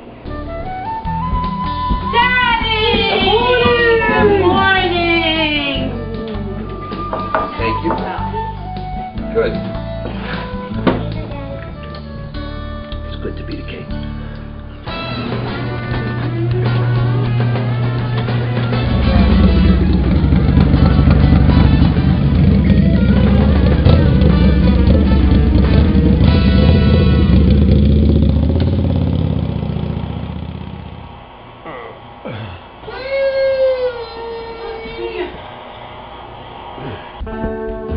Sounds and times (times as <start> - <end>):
Music: 0.0 - 27.9, 37.2 - 37.9
Motorcycle: 16.6 - 31.5.